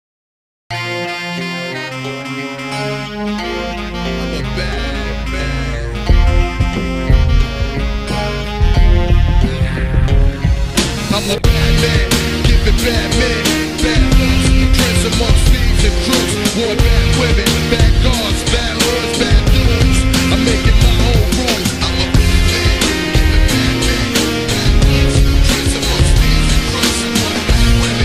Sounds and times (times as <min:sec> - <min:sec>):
Theme music: 0:00.7 - 0:28.0.